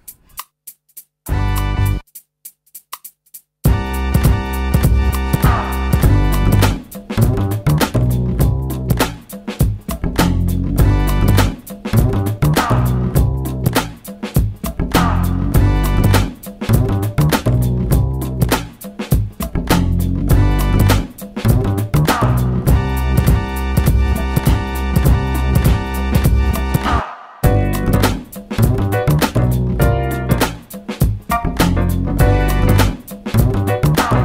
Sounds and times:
Music: 0.0 - 34.2.

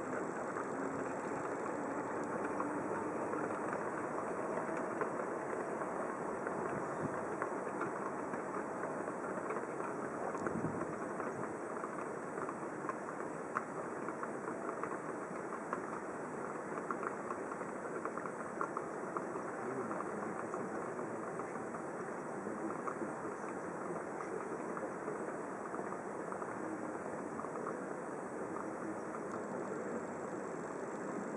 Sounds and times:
Speech: 0.0 - 31.3.

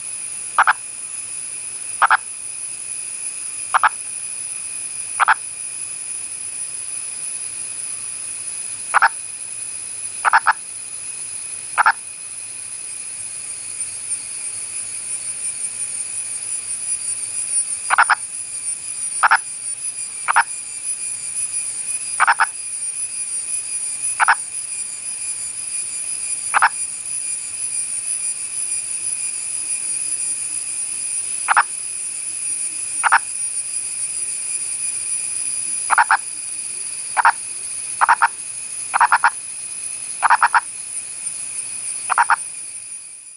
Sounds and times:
Frog: 0.0 - 0.9, 2.0 - 2.3, 3.7 - 4.1, 5.1 - 5.5, 8.8 - 9.2, 10.2 - 10.7, 11.7 - 12.1, 17.9 - 18.3, 19.2 - 19.6, 20.2 - 20.6, 22.2 - 22.7, 24.1 - 24.5, 26.5 - 26.9, 31.4 - 31.8, 33.0 - 33.4, 35.8 - 39.4, 40.2 - 40.8, 42.0 - 42.6.

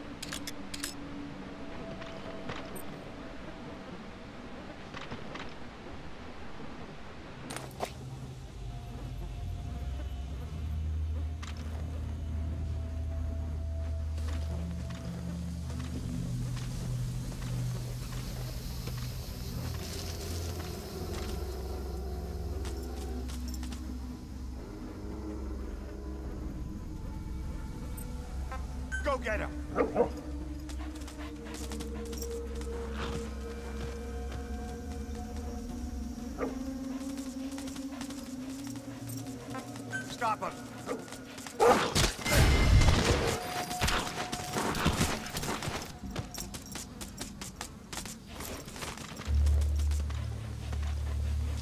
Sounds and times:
Music: 0.0 - 51.6
Speech: 29.0 - 29.6, 40.1 - 40.6.

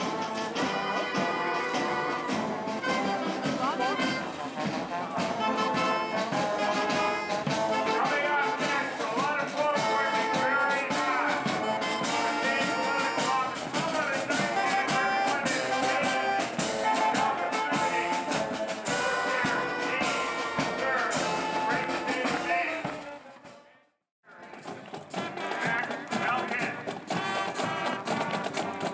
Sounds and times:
Steelpan: 0.0 - 23.6.

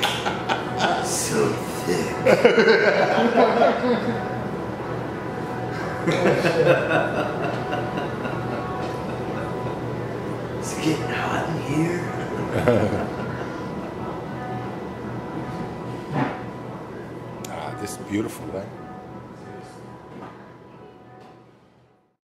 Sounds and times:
Music: 13.8 - 22.2.

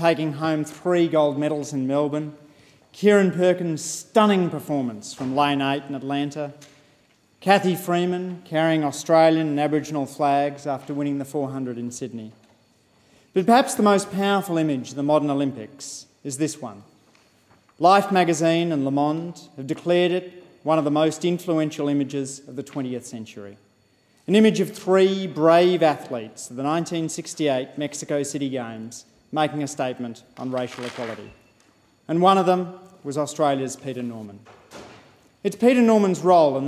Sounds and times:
Male speech, man speaking: 0.0 - 2.4, 3.0 - 6.6, 7.4 - 12.4, 13.4 - 16.9, 17.8 - 23.6, 24.3 - 31.4, 32.1 - 34.5, 35.4 - 36.6
Narration, monologue: 0.0 - 36.6.

